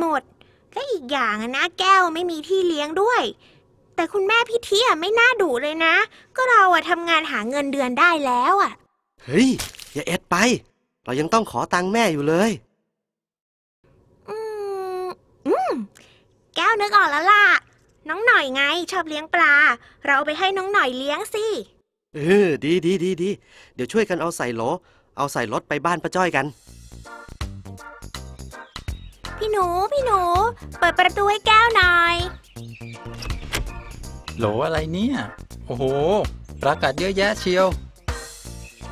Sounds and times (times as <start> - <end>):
Child speech, kid speaking: 0.0 - 3.4, 4.0 - 8.9, 16.6 - 21.8, 29.4 - 32.4.